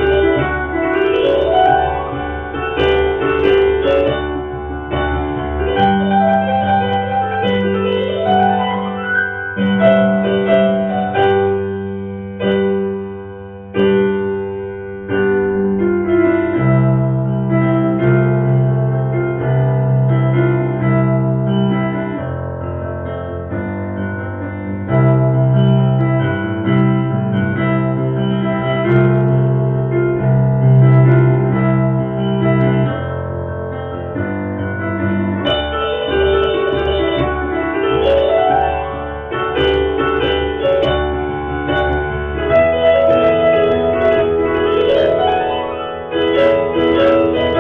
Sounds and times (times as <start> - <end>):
Electric piano: 0.0 - 47.6.